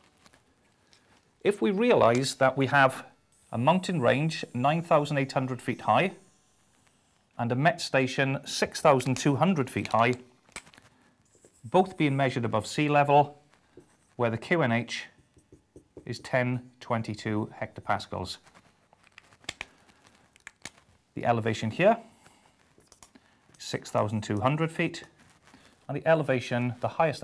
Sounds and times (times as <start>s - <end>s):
Inside, small room: 0.0s - 27.2s
Speech: 1.4s - 6.2s, 7.4s - 10.2s, 11.7s - 13.4s, 14.2s - 15.2s, 16.0s - 18.4s, 21.2s - 22.1s, 23.6s - 25.2s, 25.9s - 27.2s.